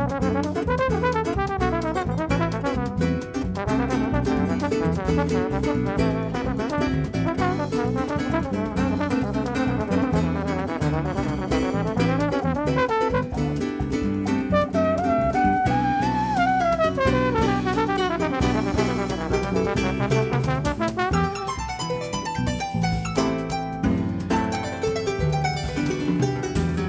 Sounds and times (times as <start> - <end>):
Drum: 0.0 - 26.8
Harp: 1.2 - 26.8.